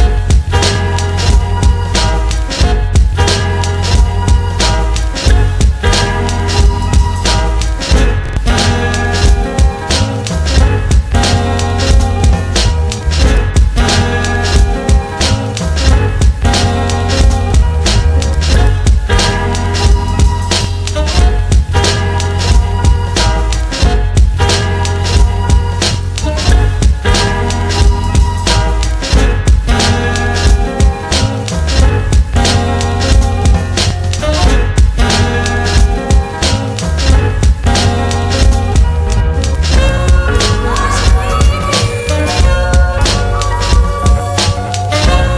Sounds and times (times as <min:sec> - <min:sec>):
Music: 0:00.0 - 0:45.3.